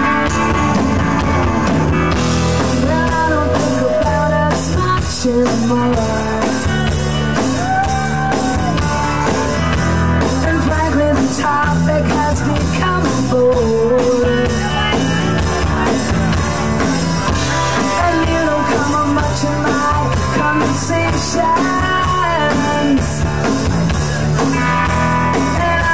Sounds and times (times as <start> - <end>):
Music: 0.0 - 25.9.